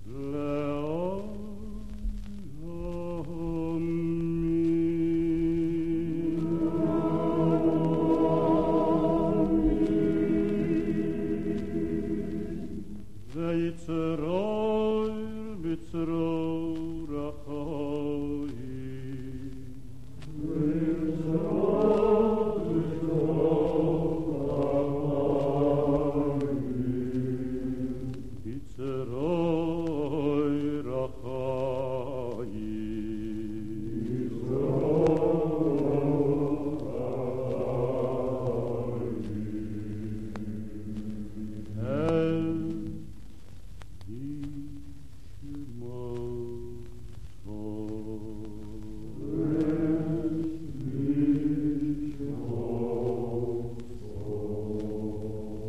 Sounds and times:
Chant: 0.0s - 55.6s.

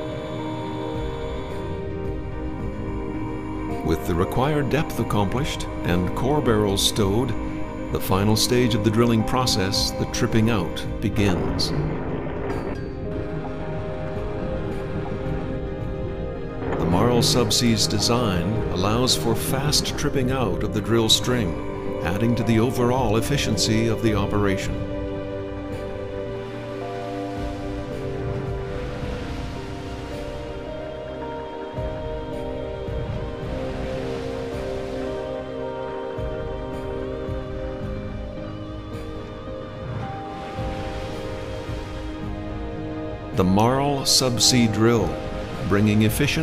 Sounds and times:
Music: 0.0s - 46.4s
Speech: 3.8s - 7.4s, 8.0s - 11.9s, 16.8s - 24.8s, 43.4s - 46.4s.

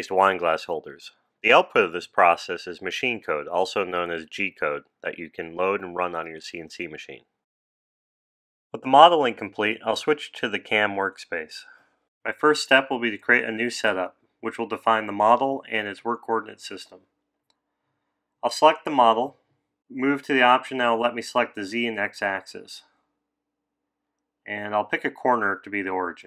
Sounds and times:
Speech: 0.0s - 7.3s, 8.8s - 17.0s, 18.4s - 22.9s, 24.5s - 26.2s.

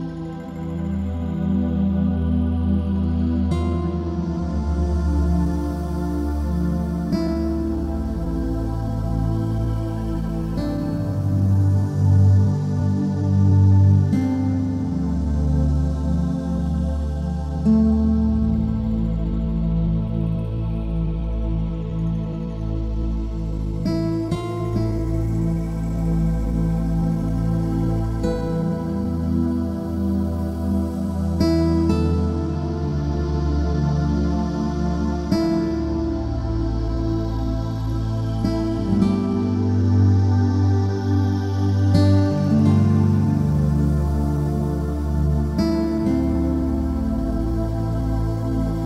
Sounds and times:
Tender music: 0.0s - 48.8s.

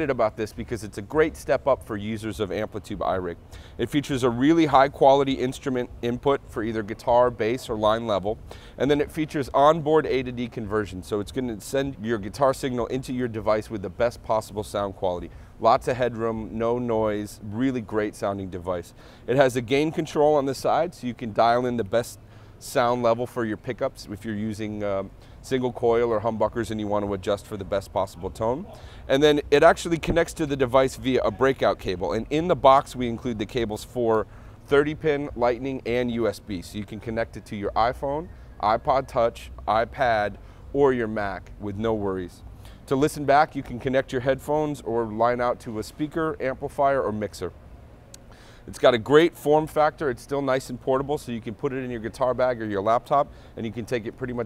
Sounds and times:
Speech: 0.0s - 47.6s, 48.7s - 54.4s.

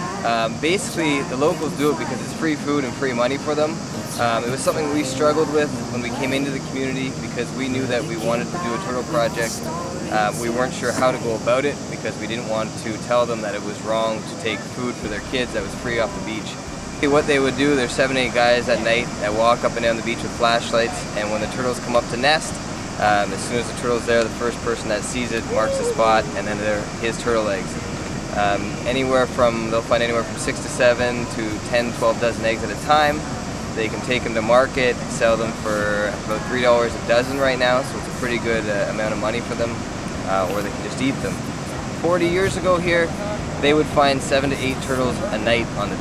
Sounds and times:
Speech: 0.0s - 27.8s, 28.4s - 33.2s, 33.8s - 46.0s.

